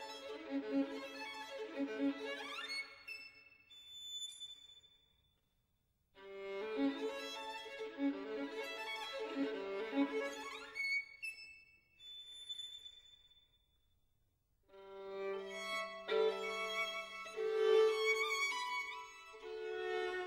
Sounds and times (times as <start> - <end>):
Violin, fiddle: 0.0 - 3.4, 6.2 - 11.6, 14.8 - 20.2.